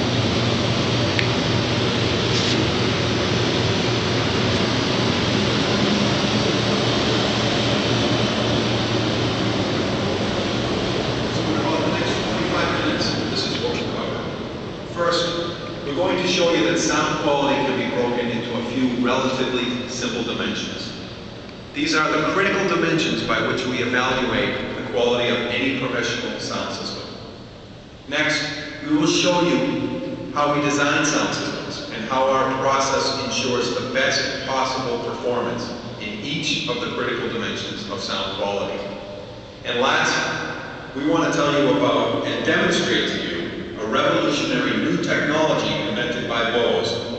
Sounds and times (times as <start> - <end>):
Speech: 11.3 - 21.0, 21.8 - 27.1, 28.1 - 39.0, 39.6 - 40.4, 41.0 - 47.1.